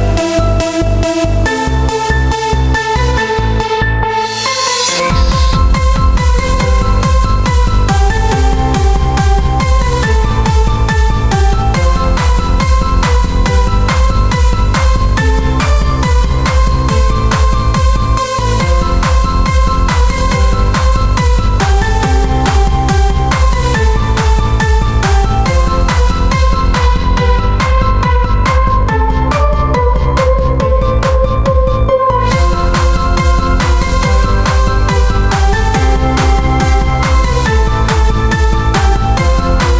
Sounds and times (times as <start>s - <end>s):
Techno: 0.0s - 39.7s.